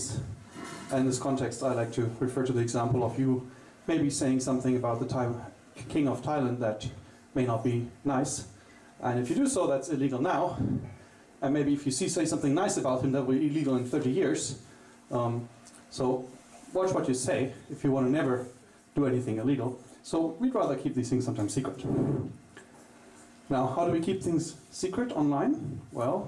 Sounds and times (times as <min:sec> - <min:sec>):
Speech: 0:00.0 - 0:22.3, 0:23.5 - 0:26.2.